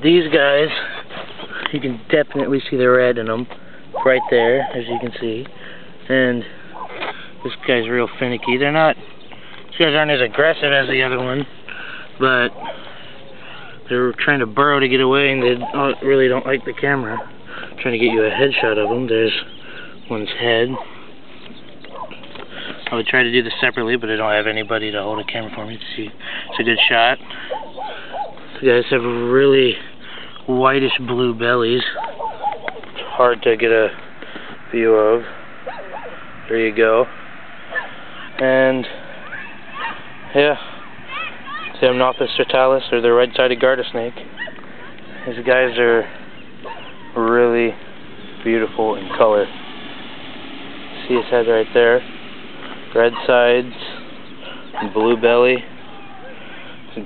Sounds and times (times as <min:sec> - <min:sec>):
Speech: 0:00.0 - 0:00.9, 0:01.7 - 0:05.5, 0:06.1 - 0:06.5, 0:07.4 - 0:09.0, 0:09.7 - 0:11.5, 0:13.9 - 0:17.2, 0:17.8 - 0:19.5, 0:22.9 - 0:27.2, 0:28.6 - 0:29.8, 0:30.5 - 0:32.0, 0:33.0 - 0:34.0, 0:36.5 - 0:37.1, 0:38.4 - 0:39.0, 0:41.8 - 0:44.2, 0:47.2 - 0:47.8, 0:48.4 - 0:49.5, 0:51.0 - 0:52.0, 0:52.9 - 0:54.0, 0:54.8 - 0:55.7
Outside, rural or natural: 0:00.0 - 0:57.0
Animal: 0:03.9 - 0:05.2, 0:31.8 - 0:33.3.